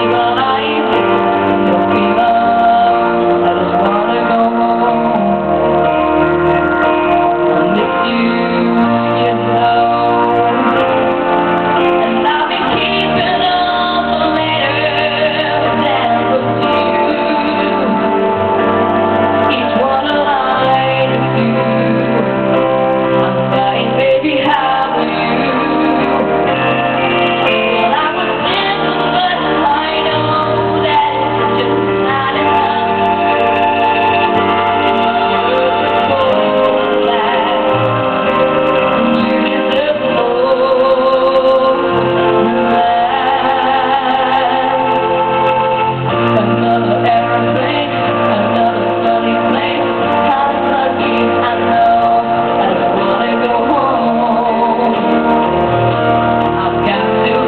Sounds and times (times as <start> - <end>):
Male singing: 0.0 - 10.8, 11.9 - 18.3, 19.4 - 22.4, 23.2 - 26.3, 27.5 - 38.1, 39.0 - 57.4
Music: 0.0 - 57.4.